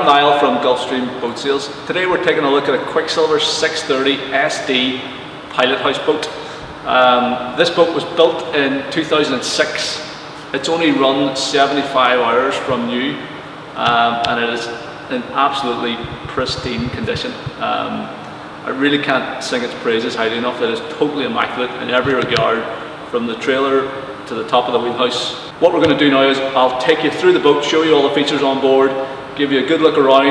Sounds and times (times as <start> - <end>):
Speech: 0.0 - 30.3.